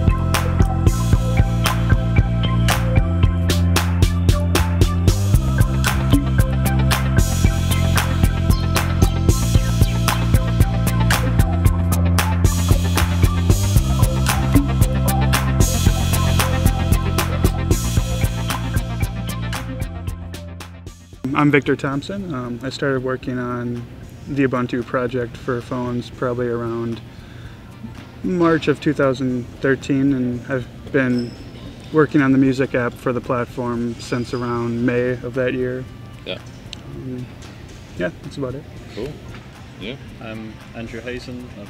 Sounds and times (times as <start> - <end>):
Soundtrack music: 0.0 - 21.4.